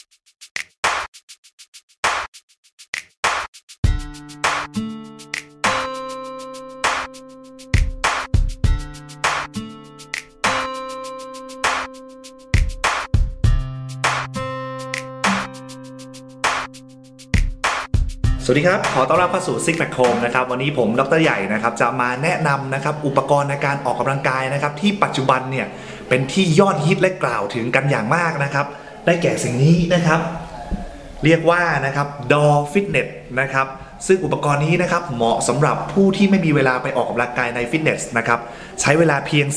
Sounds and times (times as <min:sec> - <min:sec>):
Speech: 0:18.4 - 0:39.5.